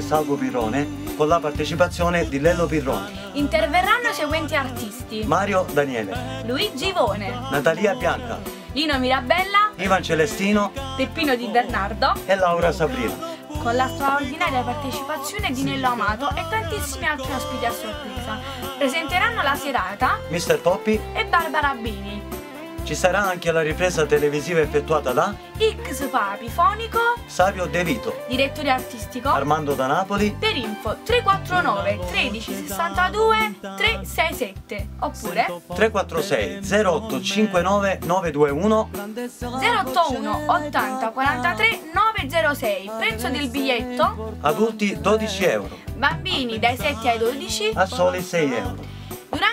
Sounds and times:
Speech: 0.0s - 22.2s, 22.9s - 38.9s, 39.5s - 48.8s
Music: 0.0s - 49.5s.

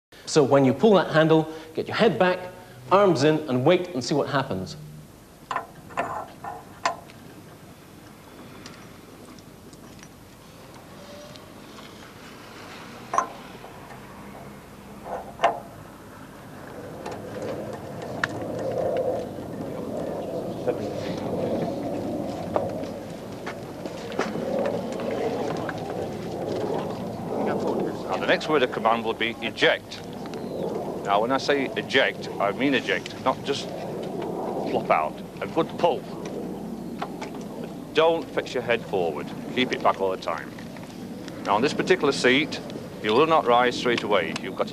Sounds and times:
Speech: 0.3s - 4.8s, 27.4s - 30.0s, 31.1s - 33.7s, 34.6s - 36.1s, 38.0s - 40.5s, 41.5s - 44.7s.

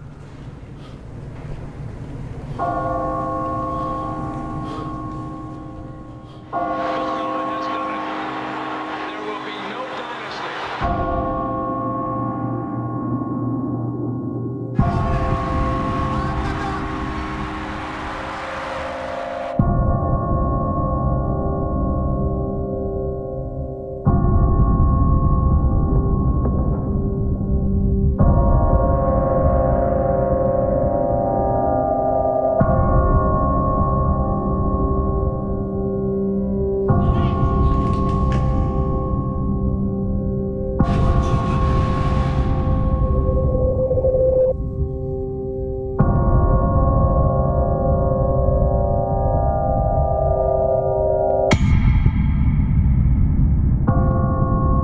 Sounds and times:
Music: 0.5s - 54.8s.

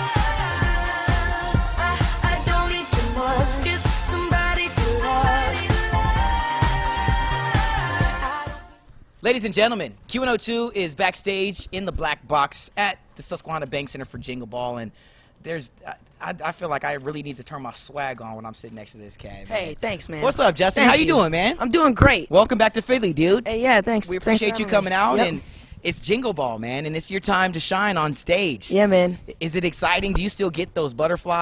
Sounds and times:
Speech: 9.2s - 31.4s.

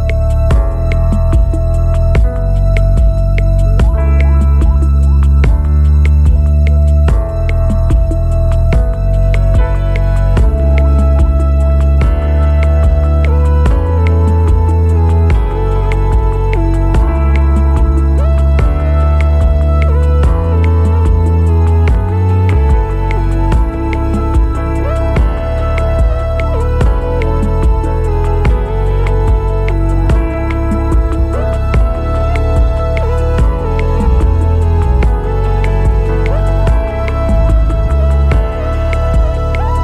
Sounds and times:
Music: 0.0s - 39.8s.

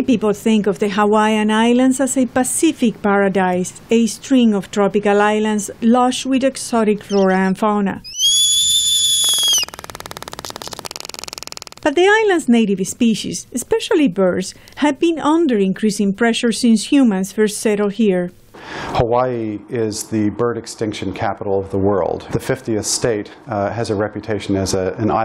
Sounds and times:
Speech: 0.0s - 8.0s, 11.9s - 18.4s, 19.0s - 25.2s
Bird: 8.0s - 11.8s.

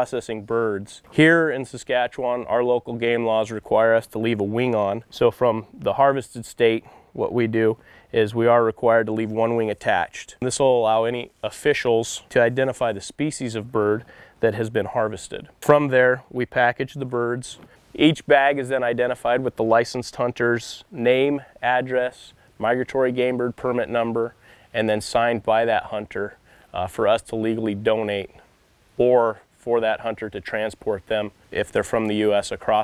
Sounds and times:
Speech: 0.0s - 28.4s, 29.0s - 32.8s.

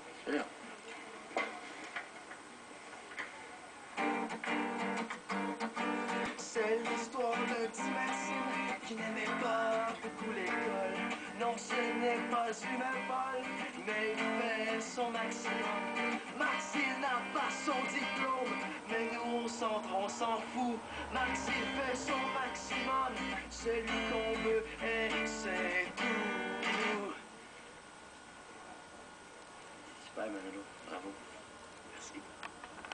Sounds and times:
Speech: 0.0s - 1.6s, 30.0s - 32.4s
Music: 4.0s - 27.2s.

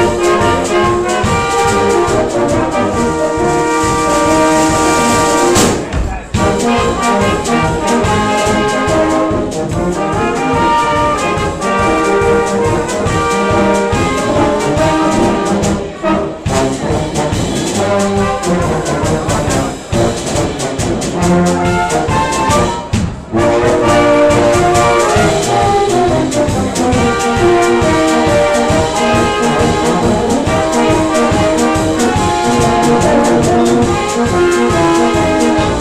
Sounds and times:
Brass instrument: 0.0s - 35.8s
Classical music: 0.0s - 35.8s
Orchestra: 0.0s - 35.8s.

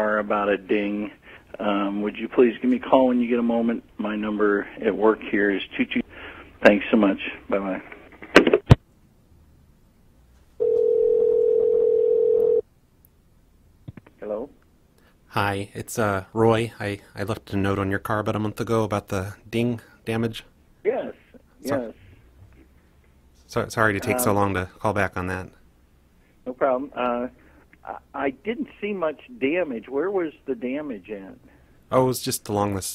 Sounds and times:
Speech: 15.3s - 22.0s, 23.5s - 25.6s, 26.5s - 32.9s.

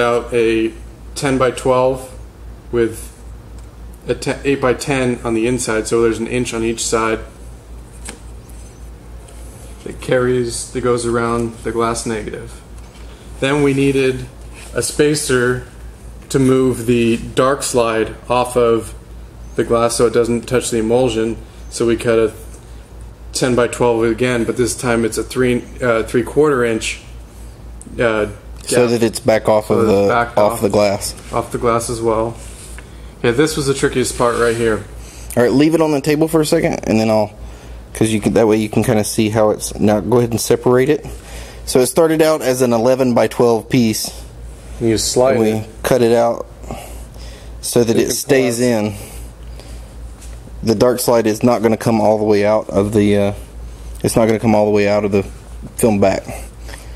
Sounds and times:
Speech: 0.0s - 3.2s, 4.0s - 7.4s, 9.8s - 12.6s, 13.4s - 19.0s, 19.6s - 22.5s, 23.3s - 27.1s, 27.8s - 32.4s, 33.2s - 46.8s, 47.6s - 49.1s, 50.6s - 56.5s.

